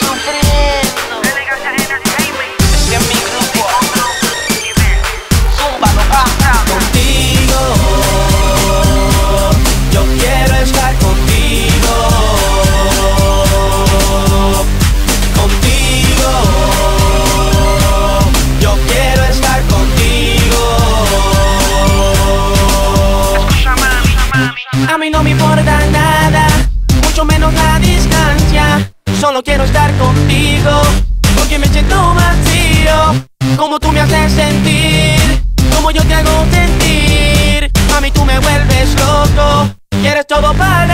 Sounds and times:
Music: 0:00.0 - 0:40.9.

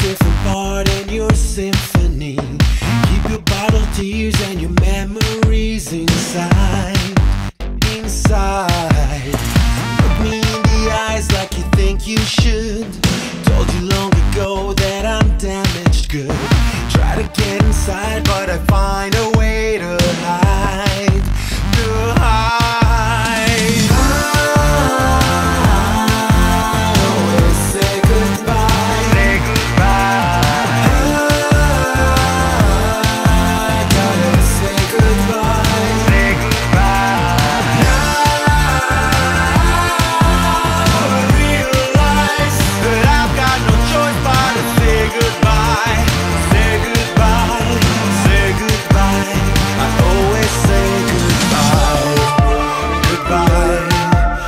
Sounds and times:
Music: 0:00.0 - 0:54.4.

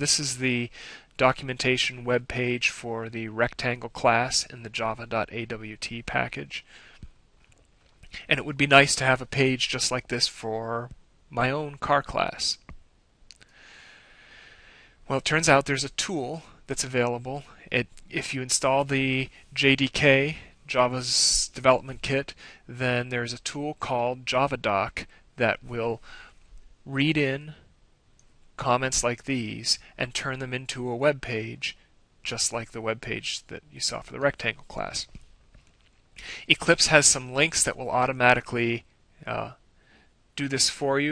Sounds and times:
Speech: 0:00.0 - 0:06.7, 0:08.1 - 0:12.7, 0:15.1 - 0:26.0, 0:26.8 - 0:27.6, 0:28.6 - 0:35.2, 0:36.4 - 0:39.6, 0:40.4 - 0:41.1.

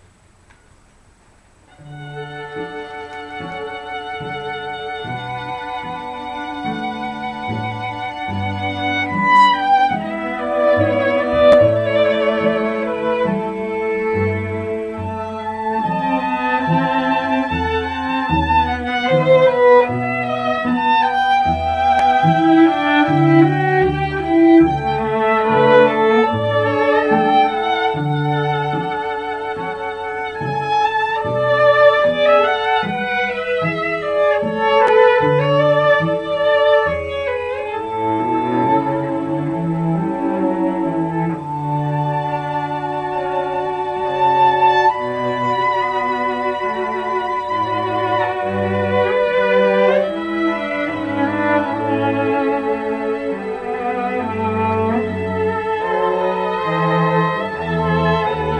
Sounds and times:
Music: 0:01.7 - 0:58.5.

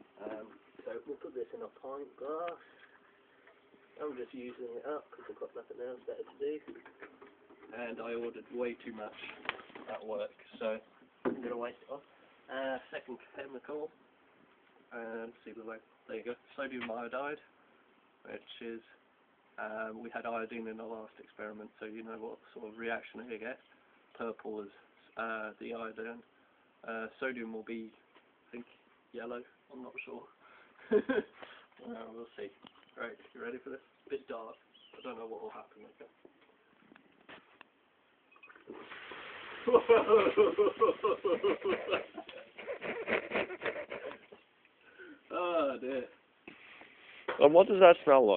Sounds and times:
Speech: 0:00.2 - 0:02.6, 0:04.0 - 0:06.7, 0:07.7 - 0:14.0, 0:14.9 - 0:17.5, 0:18.2 - 0:19.0, 0:19.6 - 0:23.6, 0:24.2 - 0:30.4, 0:31.8 - 0:36.2, 0:47.4 - 0:48.3.

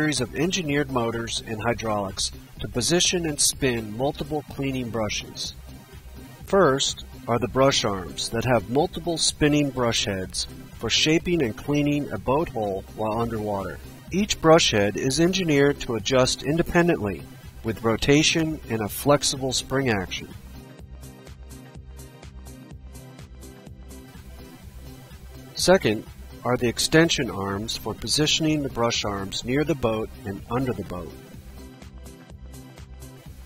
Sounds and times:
Speech: 0:00.0 - 0:05.6, 0:06.5 - 0:20.4, 0:25.6 - 0:31.2.

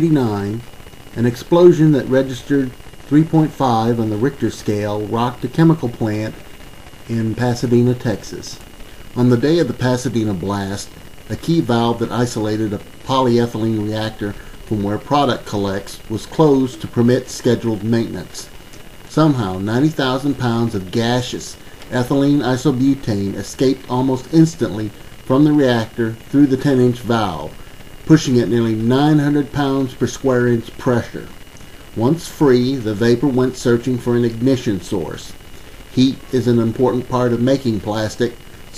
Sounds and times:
Speech: 0:00.0 - 0:06.4, 0:07.1 - 0:08.6, 0:09.2 - 0:18.5, 0:19.1 - 0:31.4, 0:32.0 - 0:38.7.

